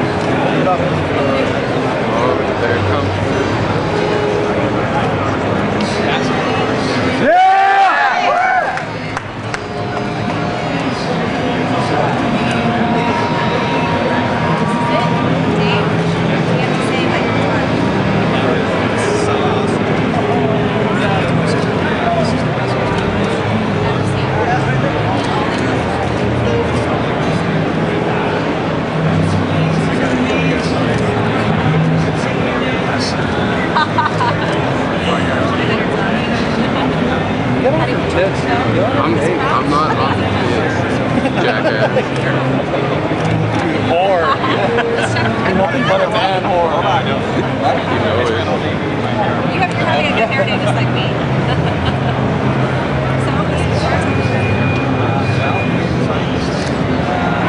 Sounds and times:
Speech: 0:00.0 - 0:07.4, 0:09.8 - 0:51.3.

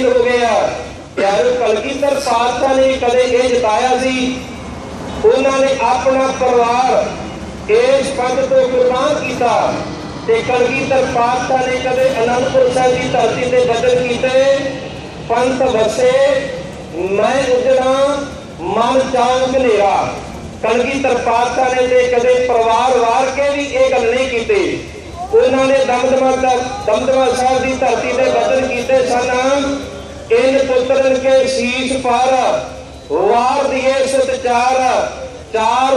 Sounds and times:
Male speech, man speaking: 0:00.0 - 0:04.4, 0:05.2 - 0:07.1, 0:07.7 - 0:35.9
Narration, monologue: 0:00.0 - 0:35.9.

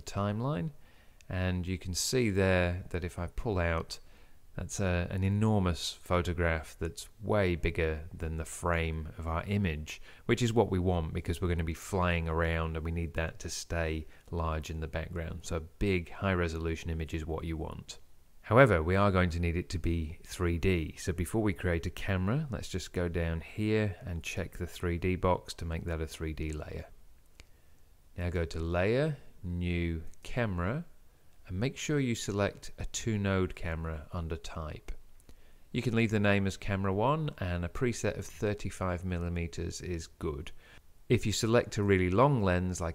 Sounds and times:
Speech: 0:00.0 - 0:27.0, 0:28.2 - 0:35.0, 0:35.7 - 0:42.9.

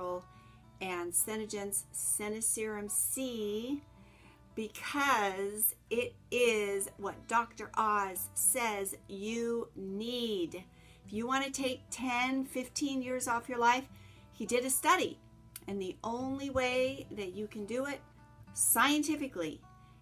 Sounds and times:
Speech: 0:00.8 - 0:03.8, 0:04.6 - 0:18.0, 0:18.6 - 0:19.6.

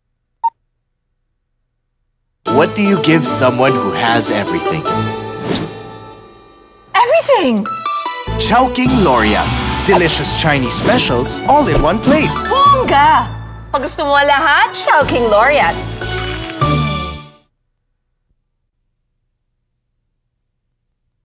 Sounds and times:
Music: 0:02.5 - 0:17.5
Speech: 0:02.6 - 0:04.9, 0:08.4 - 0:15.7.

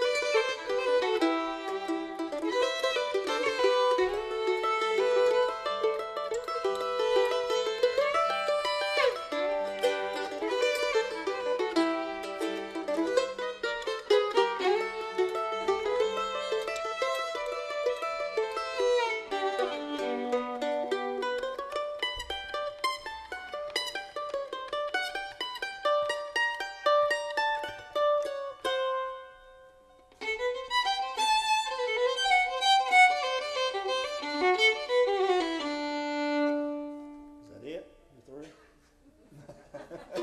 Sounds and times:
Pizzicato: 0:00.0 - 0:37.3, 0:38.8 - 0:40.2.

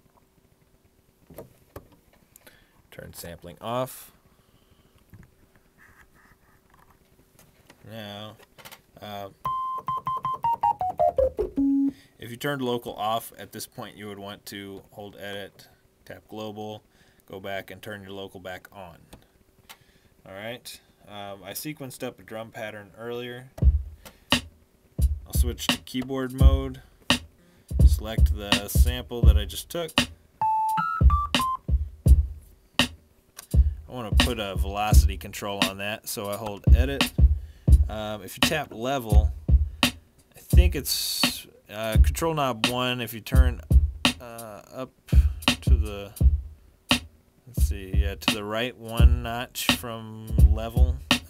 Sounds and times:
Speech: 0:02.9 - 0:04.2, 0:07.8 - 0:08.4, 0:09.0 - 0:09.4, 0:12.2 - 0:19.1, 0:20.2 - 0:23.6, 0:25.3 - 0:26.8, 0:27.8 - 0:30.0, 0:33.9 - 0:37.2, 0:37.8 - 0:39.3, 0:40.4 - 0:46.2, 0:47.5 - 0:51.1
Electric piano: 0:09.4 - 0:12.0
Synthesizer: 0:09.4 - 0:12.0, 0:30.4 - 0:31.7.

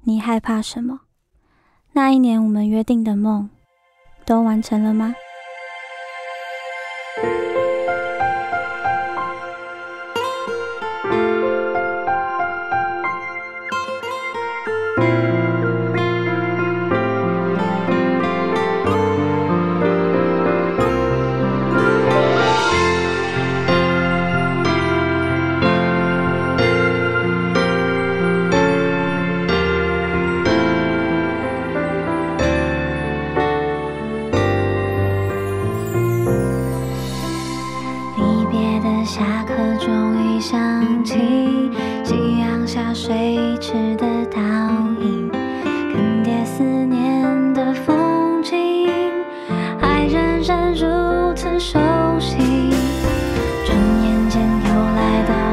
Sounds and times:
Music: 0:03.5 - 0:55.5.

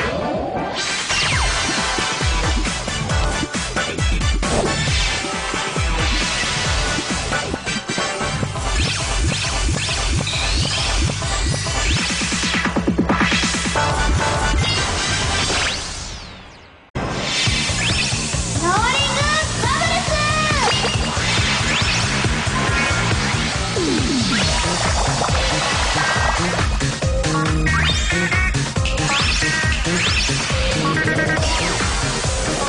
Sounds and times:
Music: 0:00.0 - 0:32.6
Speech: 0:18.6 - 0:20.8.

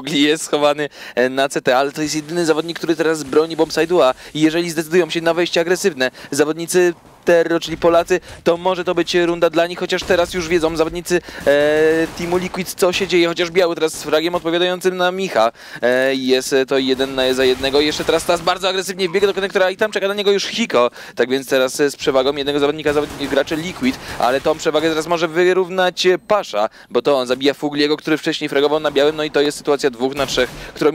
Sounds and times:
Speech: 0:00.0 - 0:30.9.

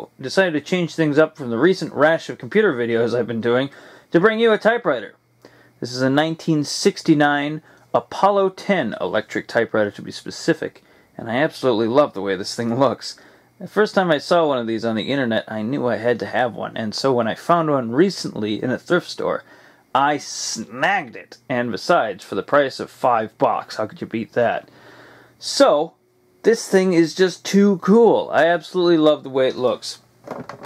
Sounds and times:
Speech: 0:00.0 - 0:05.2, 0:05.8 - 0:24.7, 0:25.4 - 0:30.0.

